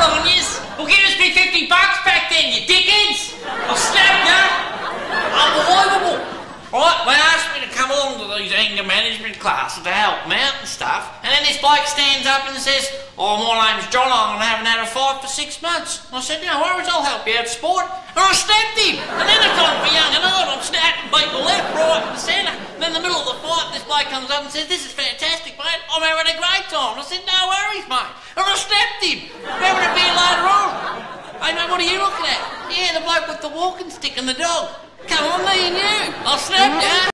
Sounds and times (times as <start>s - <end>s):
Speech: 0.0s - 37.1s.